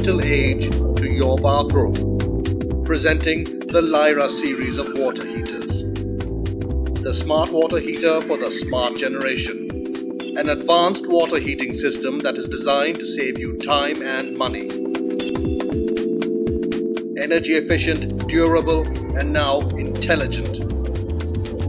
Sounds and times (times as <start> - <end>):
Speech: 0.0 - 2.0, 2.9 - 5.9, 7.1 - 9.6, 10.4 - 14.7, 17.2 - 20.6
Music: 0.0 - 21.6.